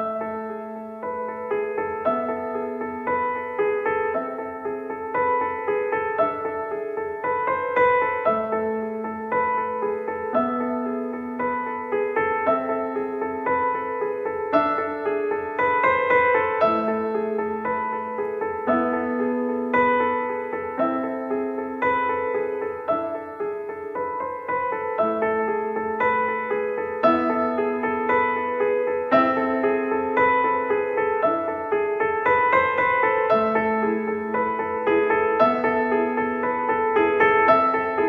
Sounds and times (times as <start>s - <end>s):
Music: 0.0s - 38.0s.